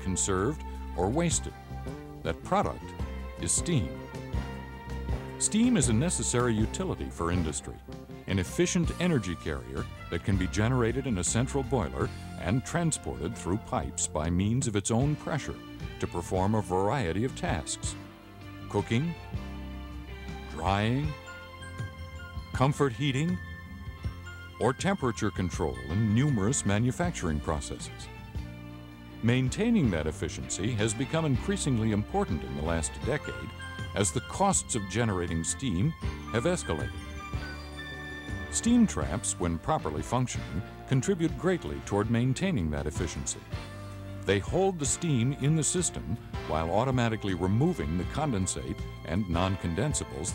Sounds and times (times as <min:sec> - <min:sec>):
Speech: 0:00.0 - 0:01.6, 0:02.2 - 0:04.0, 0:05.4 - 0:18.0, 0:18.7 - 0:19.2, 0:20.5 - 0:21.2, 0:22.6 - 0:23.4, 0:24.6 - 0:28.1, 0:29.2 - 0:36.9, 0:38.5 - 0:43.6, 0:44.3 - 0:50.3
Music: 0:00.0 - 0:50.3.